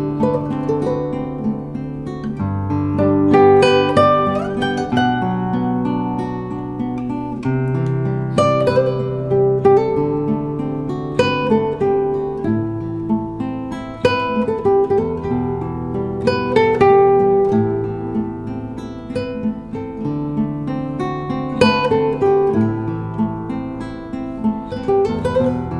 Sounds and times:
Acoustic guitar: 0.0s - 25.7s.

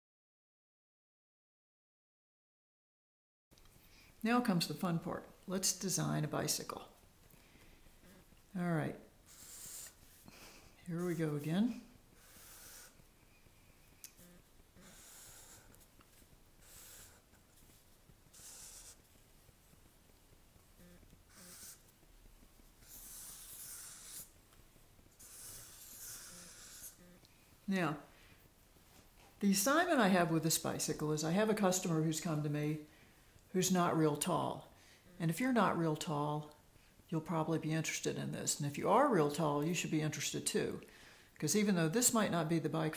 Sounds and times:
Speech: 4.2s - 7.0s, 8.5s - 9.0s, 10.9s - 11.9s, 27.7s - 28.1s, 29.4s - 32.9s, 33.5s - 36.5s, 37.1s - 40.8s, 41.4s - 42.9s.

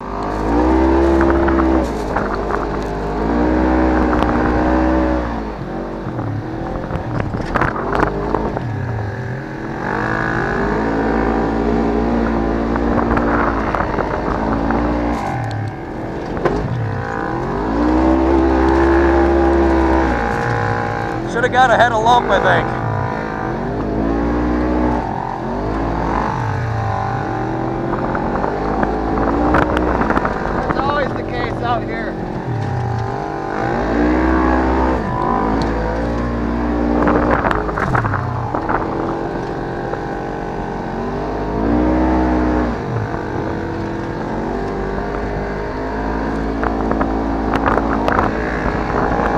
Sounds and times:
Speech: 21.3s - 22.8s, 30.7s - 32.2s.

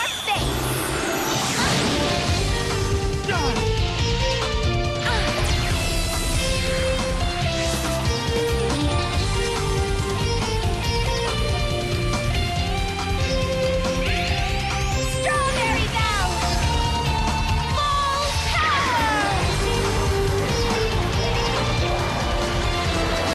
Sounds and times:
Music: 0.0s - 23.3s.

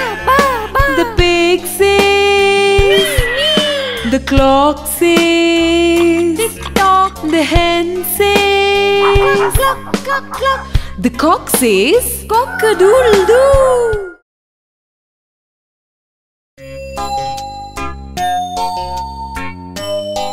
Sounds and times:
Music: 0.0s - 14.2s, 16.6s - 20.3s
Speech: 8.2s - 14.2s.

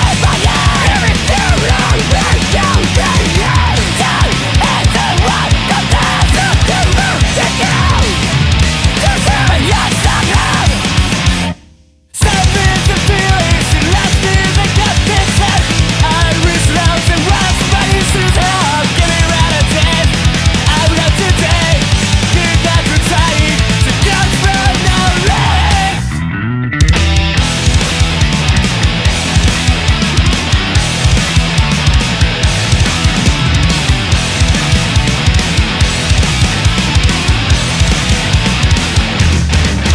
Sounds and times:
Music: 0.0s - 39.9s.

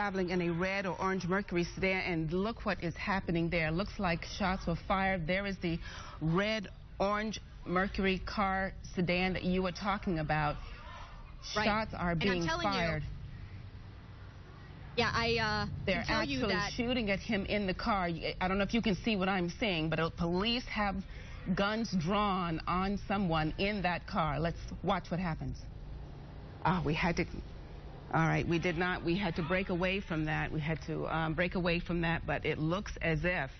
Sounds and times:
Speech: 11.5s - 13.0s, 15.0s - 25.6s.

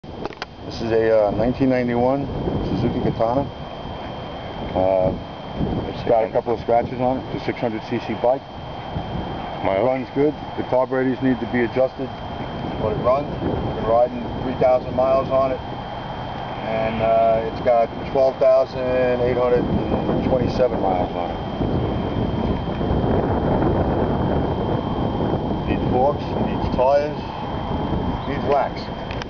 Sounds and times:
Outside, urban or manmade: 0.0s - 29.2s
Speech: 0.7s - 3.5s, 4.8s - 5.2s, 5.9s - 8.4s, 9.6s - 12.1s, 12.8s - 15.6s, 16.6s - 21.4s, 25.7s - 27.3s, 28.2s - 28.9s.

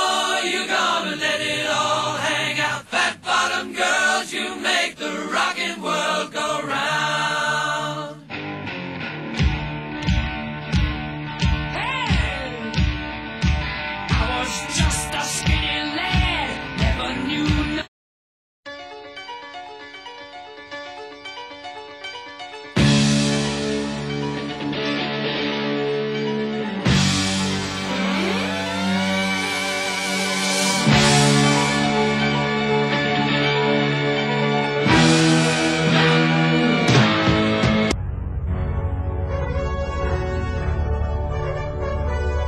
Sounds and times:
Bass guitar: 8.3s - 17.8s, 22.8s - 42.4s.

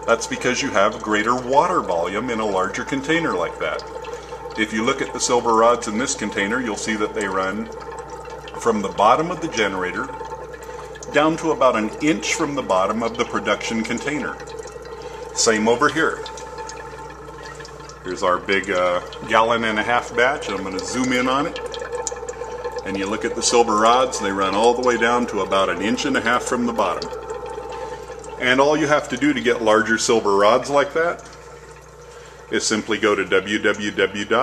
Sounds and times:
Speech: 0.0s - 3.9s, 4.6s - 7.8s, 8.6s - 10.2s, 11.1s - 14.4s, 15.4s - 16.3s, 18.0s - 21.6s, 22.8s - 27.1s, 28.4s - 31.3s, 32.5s - 34.4s.

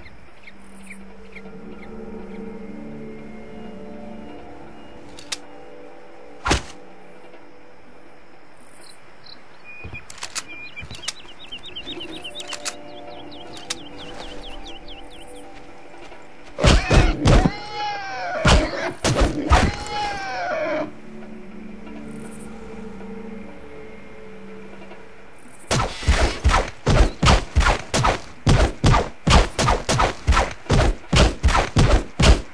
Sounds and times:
Music: 0.0s - 32.5s.

